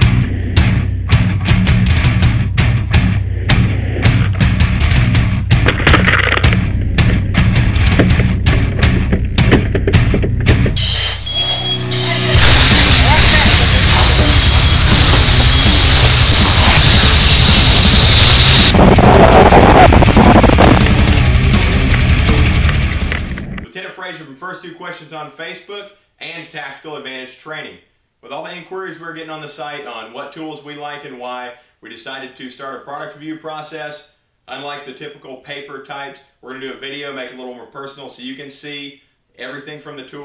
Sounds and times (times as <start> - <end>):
Speech: 11.9 - 14.2, 23.7 - 40.2.